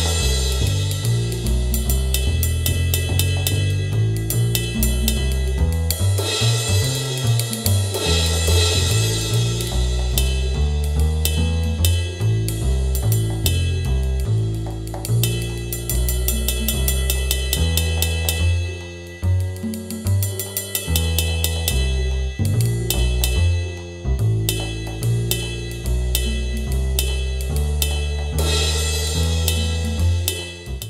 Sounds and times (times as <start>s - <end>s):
Music: 0.0s - 30.9s.